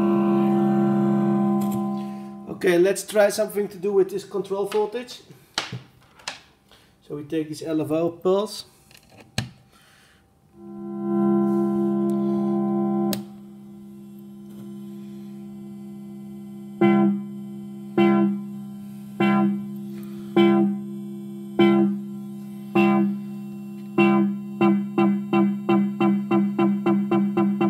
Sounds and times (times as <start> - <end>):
Electronic tuner: 0.0 - 2.9, 10.5 - 27.6
Speech: 2.5 - 5.3, 7.0 - 8.7.